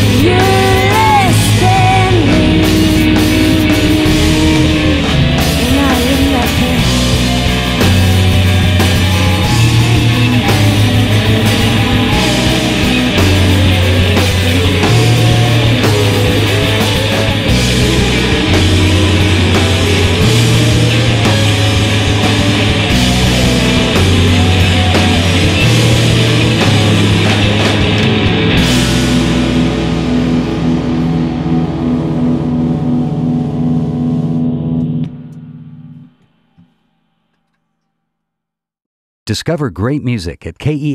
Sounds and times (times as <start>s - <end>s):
Music: 0.0s - 38.6s.